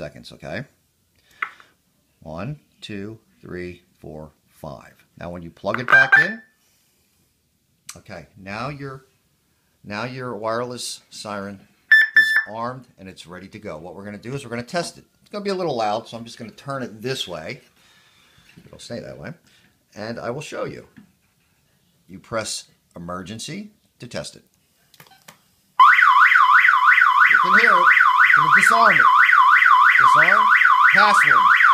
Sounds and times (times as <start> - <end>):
Speech: 0.0 - 0.8, 2.2 - 6.5, 7.9 - 9.1, 9.9 - 11.7, 12.5 - 17.7, 18.7 - 21.0, 22.1 - 24.5, 27.4 - 29.1, 30.0 - 31.5
Siren: 11.9 - 12.5, 25.8 - 31.7.